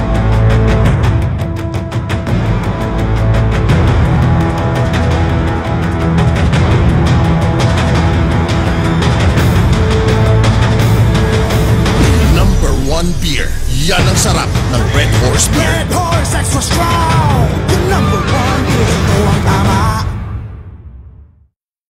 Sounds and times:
Music: 0:00.0 - 0:21.5
Speech: 0:12.0 - 0:18.4.

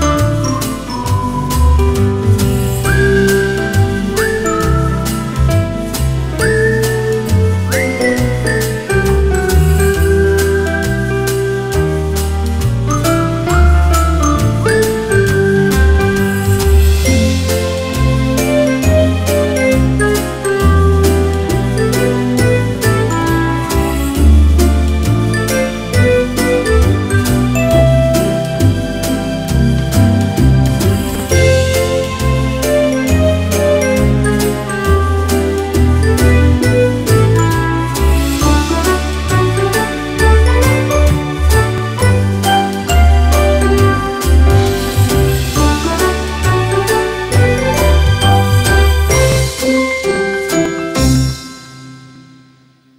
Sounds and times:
Music: 0:00.0 - 0:52.9.

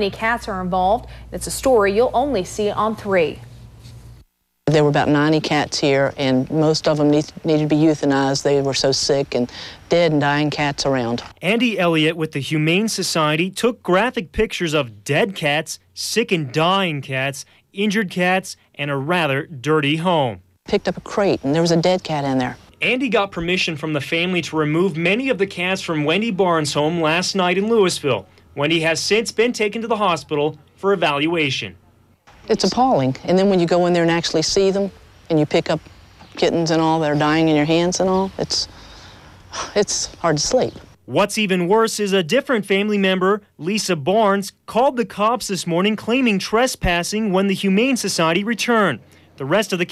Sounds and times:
Speech: 0:04.7 - 0:31.8, 0:32.5 - 0:35.8, 0:36.4 - 0:38.7.

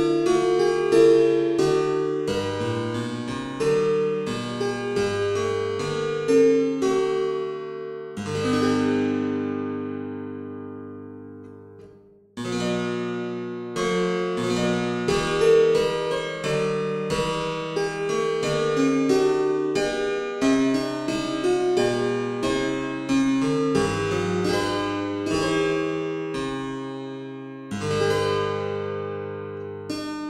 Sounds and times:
Harpsichord: 0:00.0 - 0:30.3.

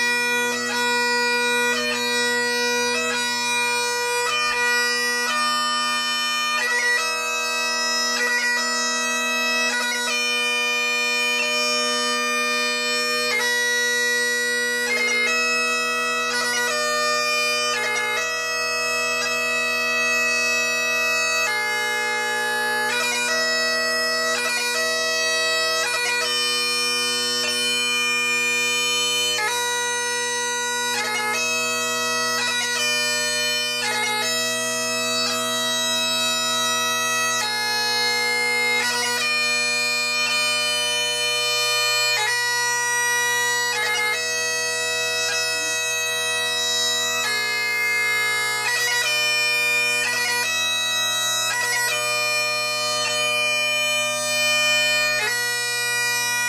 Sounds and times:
Bagpipes: 0:00.0 - 0:56.4
Wind instrument, woodwind instrument: 0:00.0 - 0:56.4.

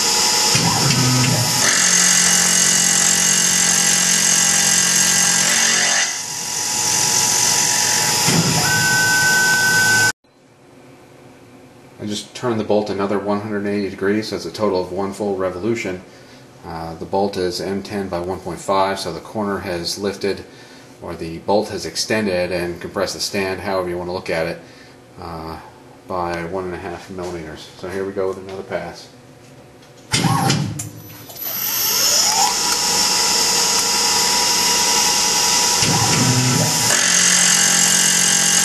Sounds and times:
Speech: 0:12.0 - 0:24.6, 0:25.2 - 0:29.2.

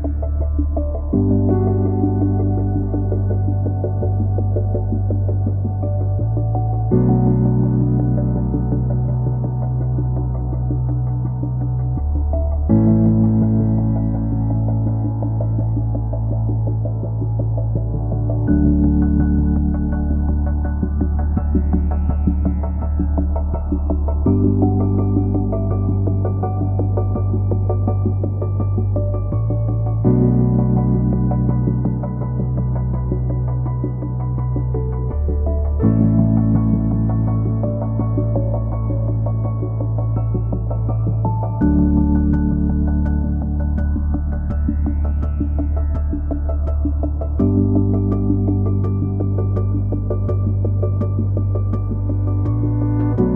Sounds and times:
Music: 0:00.0 - 0:53.3.

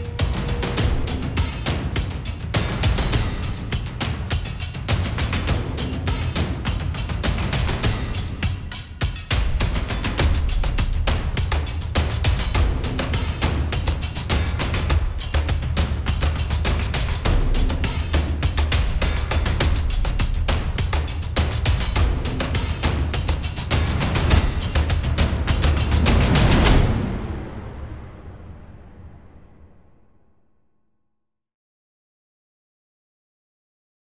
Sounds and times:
Music: 0:00.0 - 0:30.9.

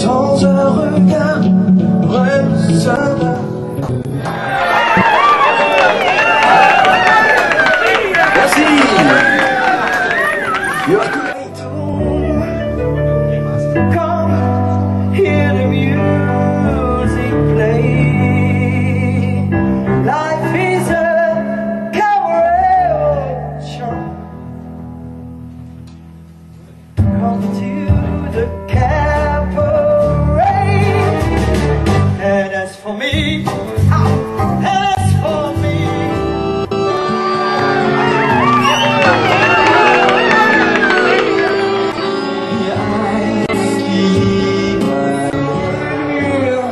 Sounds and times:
Music: 0:00.0 - 0:05.6, 0:10.2 - 0:46.7
Inside, large room or hall: 0:00.0 - 0:46.7.

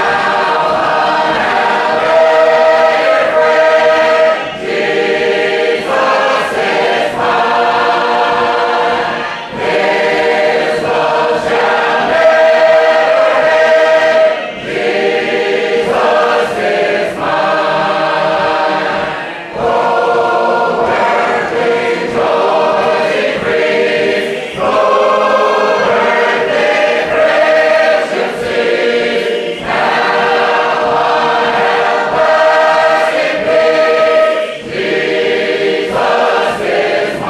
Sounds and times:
A capella: 0:00.0 - 0:37.2
Choir: 0:00.0 - 0:37.2
Gospel music: 0:00.0 - 0:37.2.

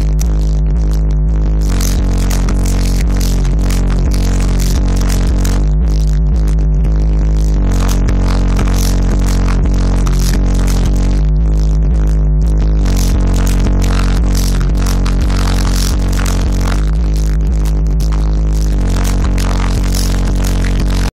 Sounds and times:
Music: 0:00.0 - 0:21.1.

